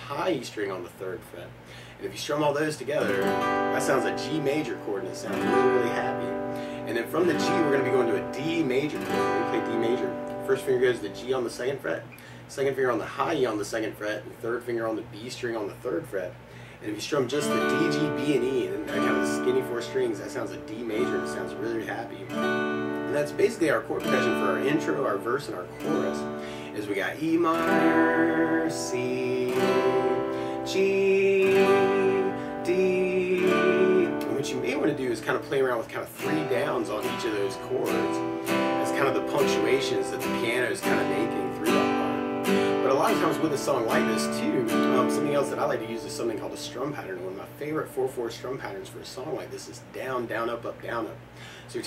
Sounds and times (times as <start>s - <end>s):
Speech: 0.0s - 22.3s, 23.1s - 30.0s, 32.7s - 38.2s, 38.8s - 42.2s, 42.8s - 51.8s
Strum: 2.9s - 12.3s, 17.0s - 47.8s.